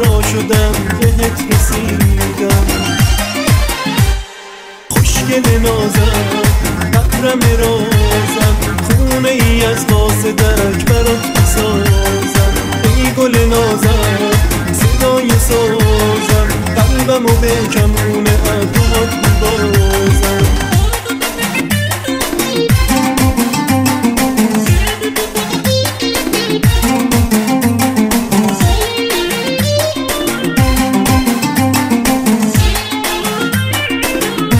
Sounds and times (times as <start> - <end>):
Folk music: 0.0 - 34.5.